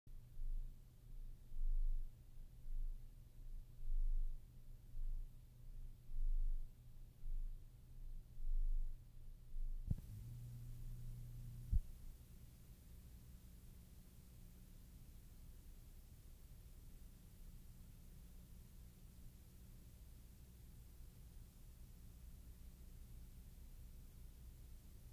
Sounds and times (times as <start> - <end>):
Silence: 0.2 - 25.1.